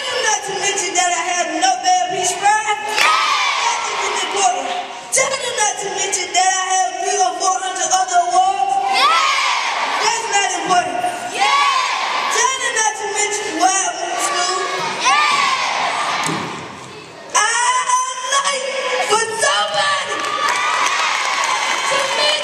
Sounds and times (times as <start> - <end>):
Child speech, kid speaking: 12.4 - 15.3.